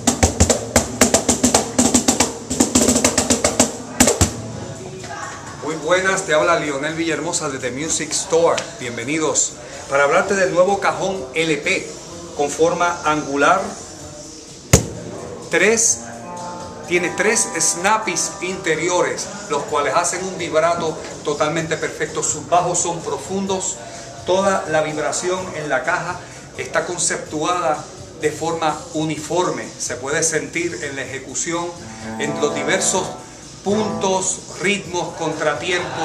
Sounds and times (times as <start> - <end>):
Background music: 0.0 - 36.0
Speech: 4.6 - 14.0, 16.9 - 36.0.